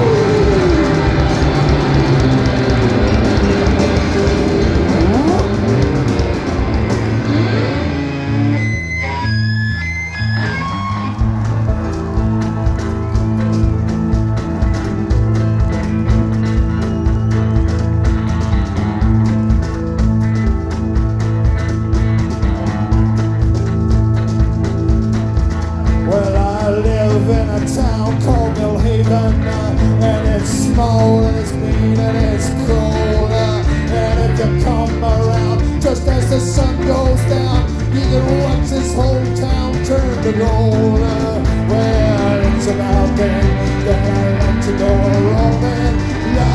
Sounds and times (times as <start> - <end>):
Music: 0.0 - 46.5
Singing: 26.1 - 46.5.